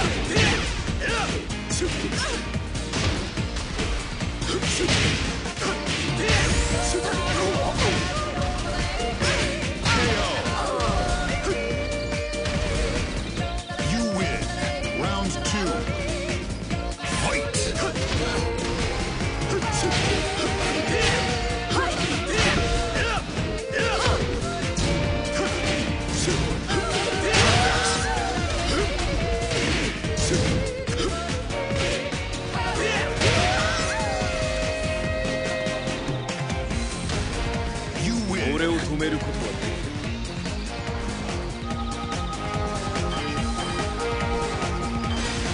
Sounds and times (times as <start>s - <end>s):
Music: 0.0s - 45.5s.